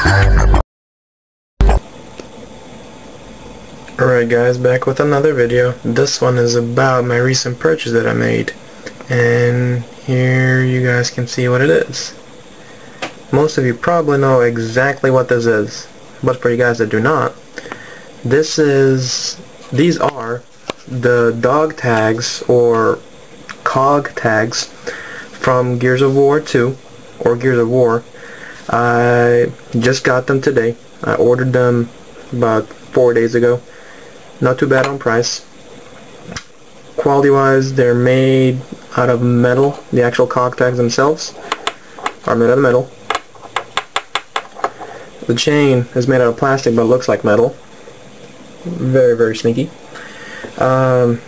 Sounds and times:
Speech: 0:04.0 - 0:12.2, 0:13.3 - 0:17.4, 0:18.2 - 0:24.7, 0:25.4 - 0:28.1, 0:28.7 - 0:33.7, 0:34.4 - 0:35.5, 0:37.0 - 0:41.4, 0:42.3 - 0:42.9, 0:45.2 - 0:47.6, 0:48.6 - 0:49.8, 0:50.6 - 0:51.2.

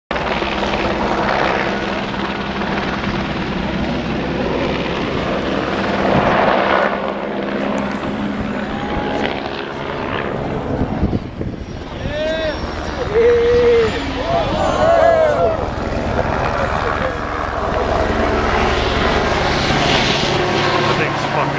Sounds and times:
Helicopter: 0:00.1 - 0:21.5.

